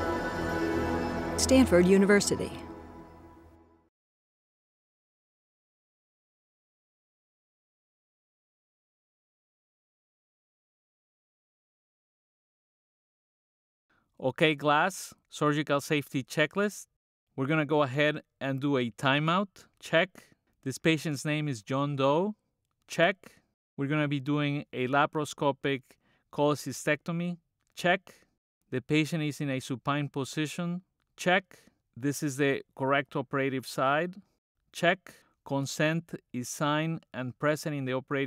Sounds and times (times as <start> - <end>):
Speech: 1.4 - 2.6, 14.2 - 28.2, 28.8 - 34.2, 34.8 - 38.2.